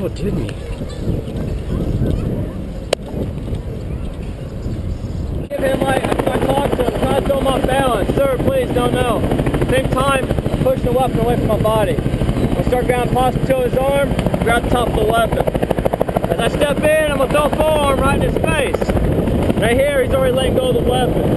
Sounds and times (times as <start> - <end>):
Helicopter: 0.0 - 21.3.